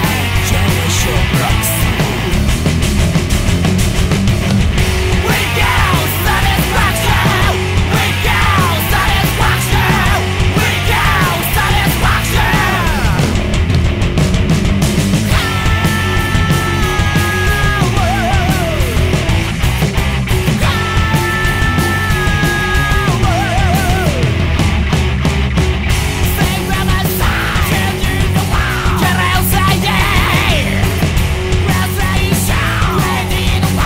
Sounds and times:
Exciting music: 0.0s - 26.6s
Grunge: 0.0s - 33.8s
Heavy metal: 0.0s - 33.8s
Progressive rock: 0.0s - 33.8s
Punk rock: 0.0s - 33.8s
Rock and roll: 0.0s - 33.8s.

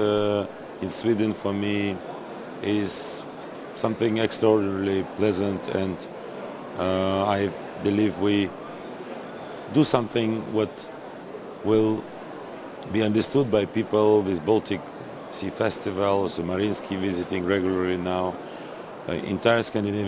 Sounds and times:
Speech: 0.0s - 2.0s, 2.6s - 6.1s, 6.8s - 8.6s, 9.7s - 10.9s, 11.6s - 12.1s, 12.8s - 18.4s, 19.1s - 20.0s.

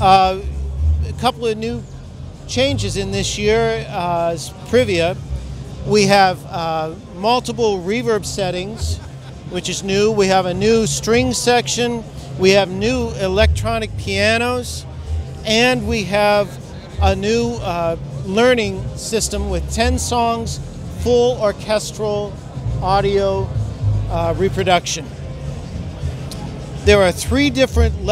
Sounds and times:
Speech: 0.0s - 1.8s, 2.5s - 5.2s, 5.9s - 23.5s, 24.1s - 25.1s, 26.8s - 28.1s
Music: 0.0s - 28.1s.

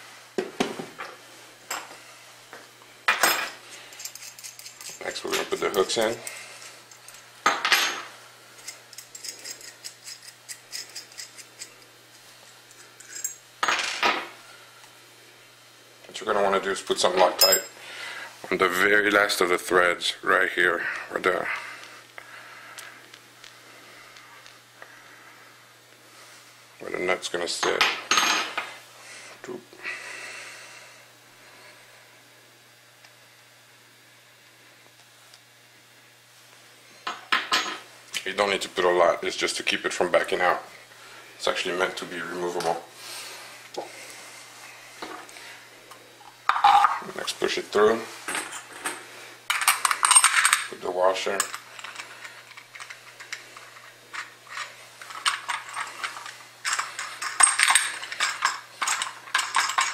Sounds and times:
Speech: 5.0s - 6.3s, 16.1s - 17.7s, 18.5s - 21.6s, 26.8s - 28.0s, 38.2s - 40.7s, 41.4s - 42.9s, 47.0s - 48.1s, 50.7s - 51.5s.

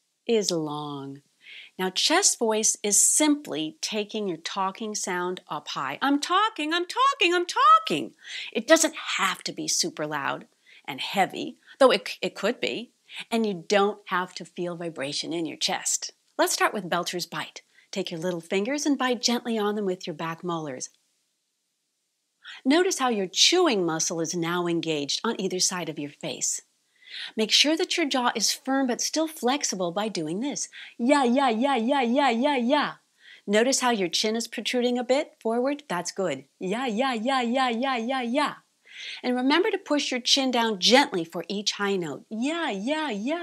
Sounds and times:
Speech: 0.3s - 1.2s, 1.8s - 20.9s, 22.5s - 26.6s, 27.4s - 38.6s, 39.2s - 43.4s.

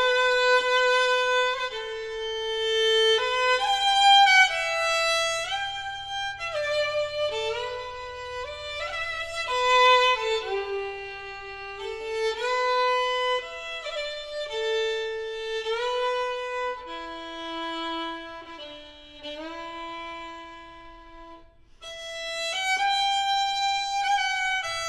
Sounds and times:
Violin, fiddle: 0.0s - 24.8s.

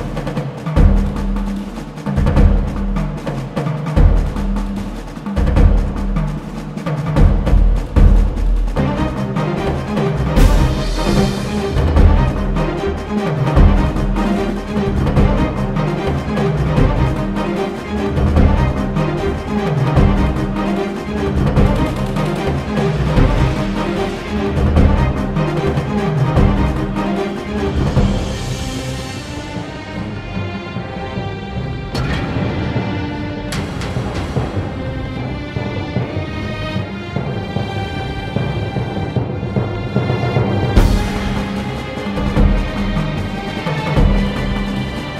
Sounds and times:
Music: 0.0s - 45.1s.

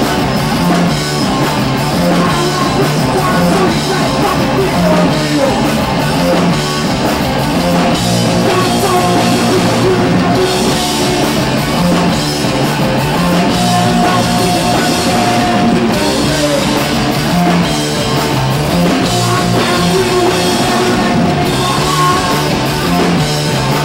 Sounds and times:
Electric guitar: 0.0s - 23.8s.

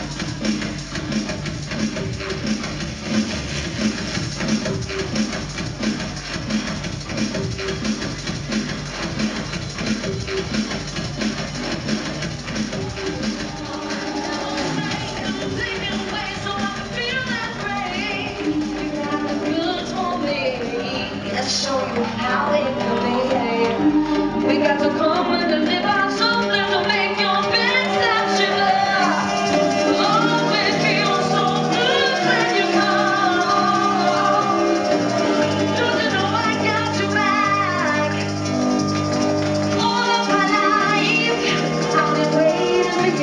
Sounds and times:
Drum and bass: 0.0s - 43.2s.

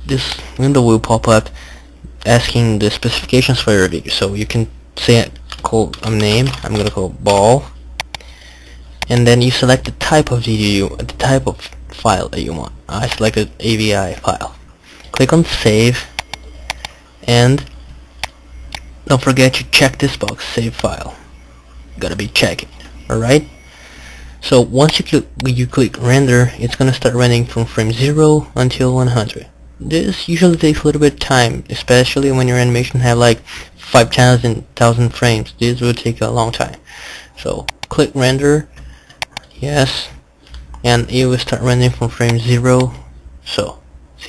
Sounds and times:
Speech: 0.0s - 7.8s, 9.0s - 16.2s, 17.2s - 17.7s, 19.0s - 21.3s, 22.0s - 23.6s, 24.4s - 38.7s, 39.5s - 40.2s, 40.8s - 44.2s.

